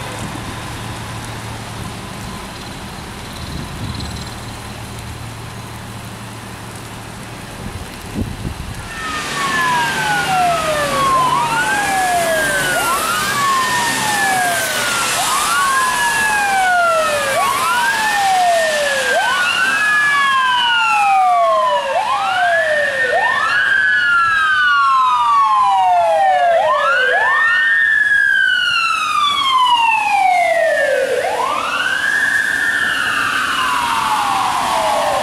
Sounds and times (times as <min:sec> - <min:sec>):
Police car (siren): 0:08.8 - 0:35.2.